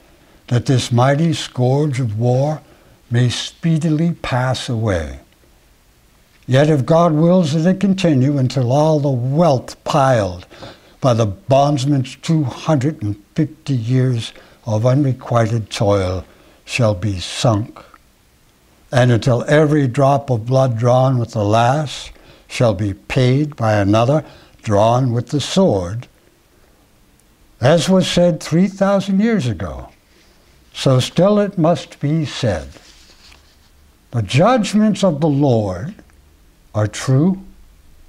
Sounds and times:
Inside, small room: 0:00.0 - 0:38.0
Speech: 0:00.5 - 0:05.3, 0:06.5 - 0:18.0, 0:18.9 - 0:26.2, 0:27.6 - 0:30.0, 0:30.7 - 0:32.9, 0:34.1 - 0:36.1, 0:36.8 - 0:37.6.

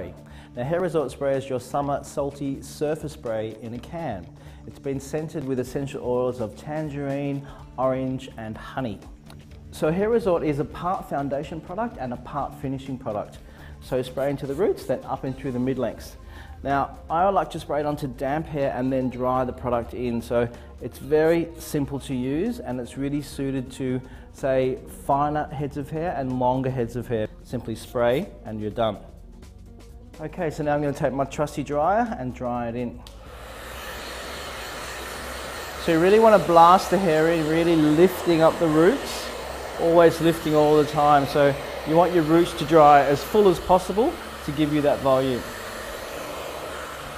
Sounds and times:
Speech: 0:00.0 - 0:09.1, 0:09.7 - 0:29.1, 0:30.2 - 0:33.0, 0:35.8 - 0:45.6
Music: 0:00.0 - 0:47.1.

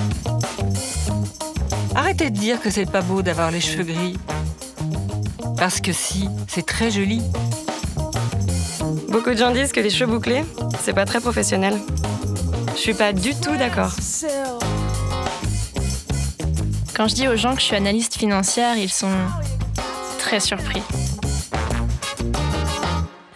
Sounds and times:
Music: 0:00.0 - 0:23.3
Speech: 0:02.0 - 0:04.2, 0:05.6 - 0:07.3, 0:09.1 - 0:11.8, 0:12.8 - 0:14.7, 0:17.0 - 0:19.6, 0:20.2 - 0:20.9.

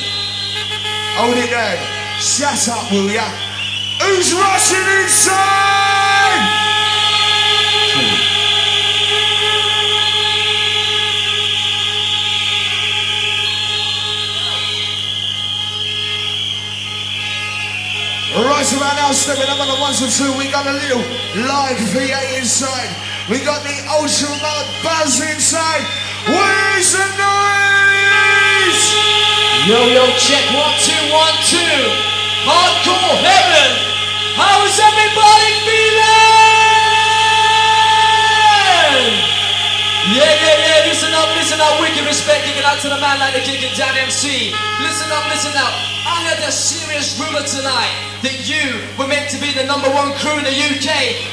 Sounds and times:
Speech: 0:01.2 - 0:03.4, 0:04.0 - 0:06.5, 0:07.9 - 0:08.3, 0:18.3 - 0:29.0, 0:29.6 - 0:39.2, 0:40.0 - 0:51.3.

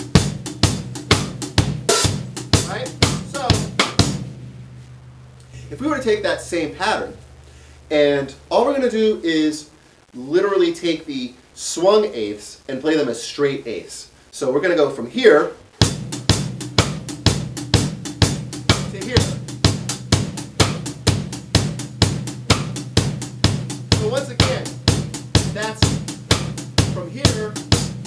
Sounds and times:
Bass drum: 0:00.0 - 0:09.2, 0:15.8 - 0:28.0
Drum kit: 0:00.0 - 0:12.8, 0:15.7 - 0:28.0.

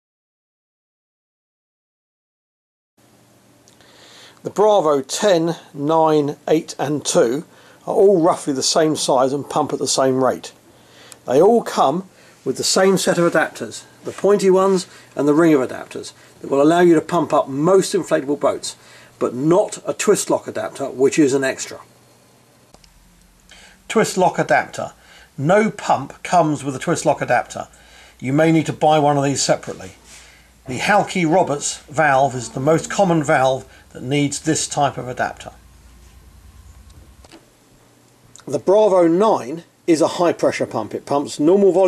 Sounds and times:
Speech: 0:04.4 - 0:10.6, 0:11.2 - 0:21.9, 0:23.9 - 0:30.0, 0:30.7 - 0:35.6, 0:38.4 - 0:41.8.

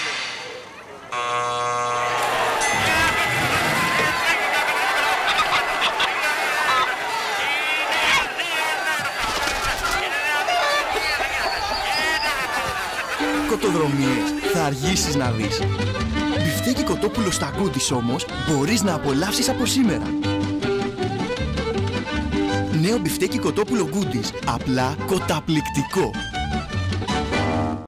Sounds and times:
Music: 0:13.2 - 0:27.8
Speech: 0:13.4 - 0:15.6, 0:16.4 - 0:20.1, 0:22.7 - 0:26.2.

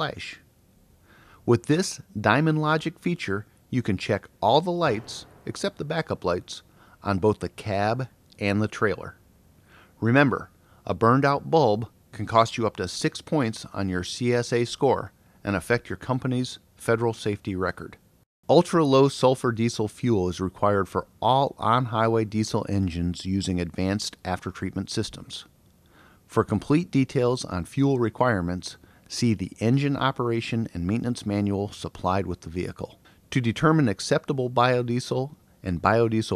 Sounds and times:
Speech: 0:00.0 - 0:00.5, 0:01.4 - 0:09.2, 0:10.0 - 0:25.5, 0:26.3 - 0:36.3.

